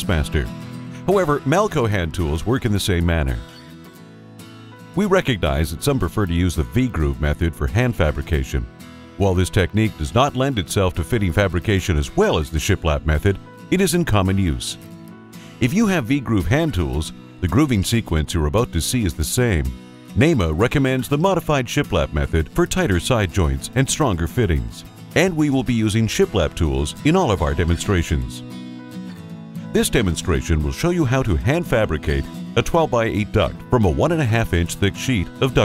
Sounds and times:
Speech: 0.0s - 3.5s, 5.0s - 14.8s, 15.6s - 28.4s, 29.7s - 35.6s
Music: 0.0s - 35.6s.

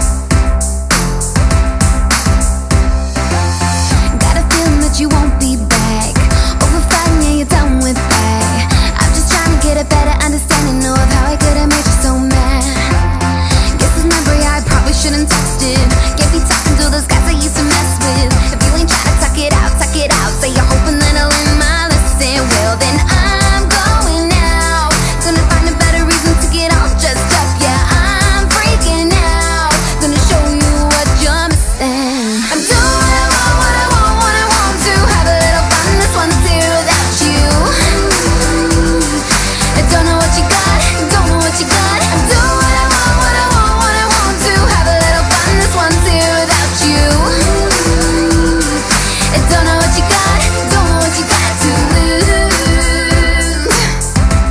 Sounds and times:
Music: 0.0s - 54.5s.

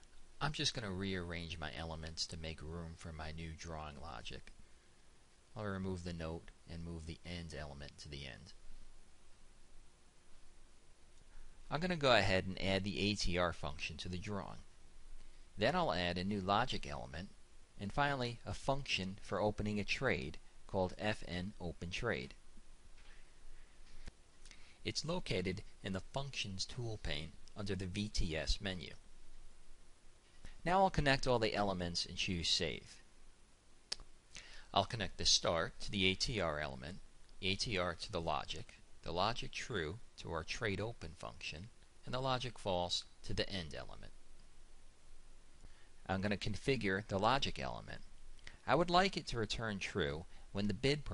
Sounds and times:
Speech: 0.4s - 4.5s, 5.6s - 8.6s, 11.7s - 14.7s, 15.6s - 22.4s, 24.8s - 29.0s, 30.6s - 33.0s, 34.7s - 44.2s, 46.0s - 51.1s.

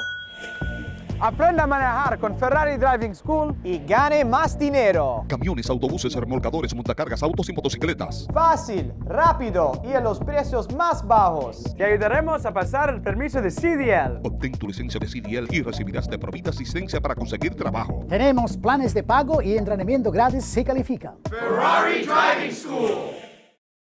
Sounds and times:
Music: 0.3s - 23.6s
Speech: 1.2s - 23.1s.

